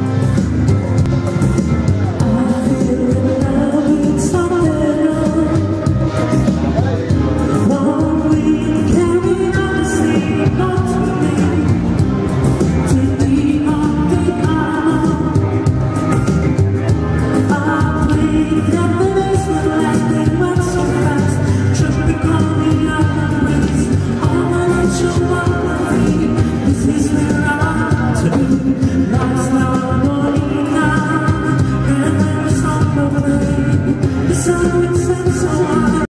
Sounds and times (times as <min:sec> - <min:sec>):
Music: 0:00.0 - 0:36.1
Male singing: 0:02.2 - 0:06.0, 0:06.7 - 0:12.0, 0:12.7 - 0:15.4, 0:17.4 - 0:36.1.